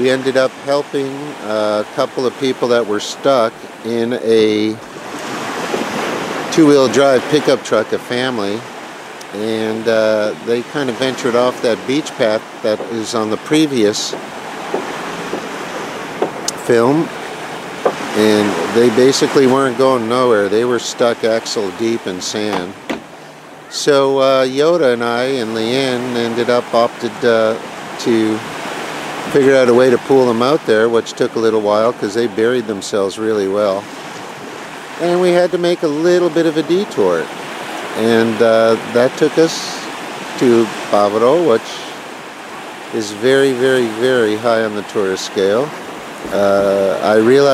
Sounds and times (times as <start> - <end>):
Waves, surf: 0.0 - 47.5.